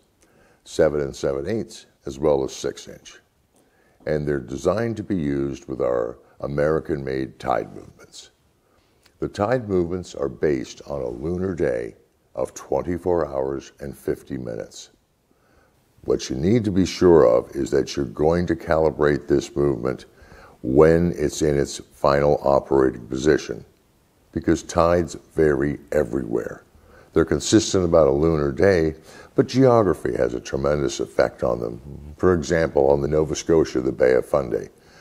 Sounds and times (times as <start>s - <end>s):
Speech: 0.6s - 3.3s, 4.0s - 8.4s, 9.2s - 15.0s, 16.0s - 34.8s.